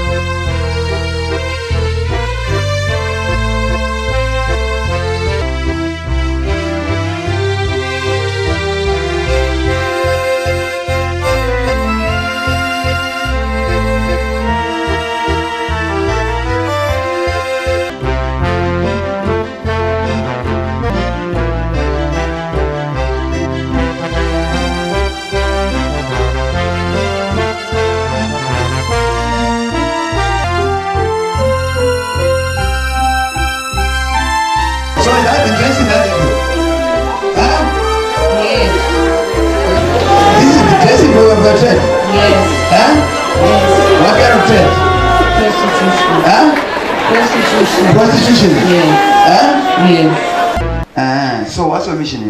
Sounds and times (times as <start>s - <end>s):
Music: 0.0s - 52.3s.